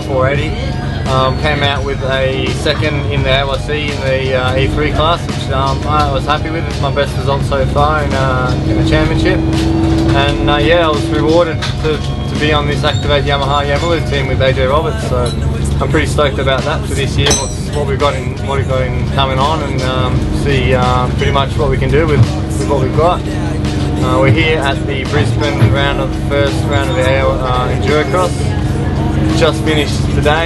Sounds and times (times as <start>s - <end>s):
Speech: 0.0s - 9.5s, 10.1s - 30.4s
Music: 0.0s - 30.4s.